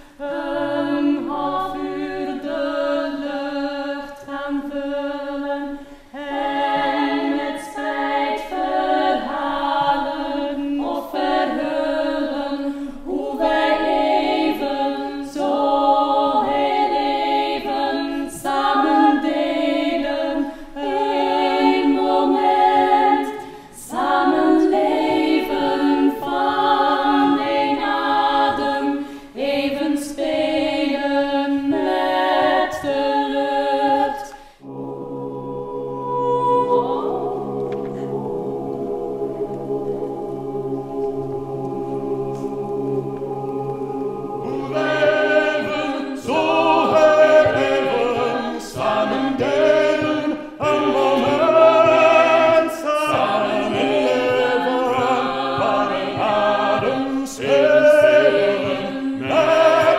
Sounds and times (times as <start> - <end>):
A capella: 0.0 - 59.9.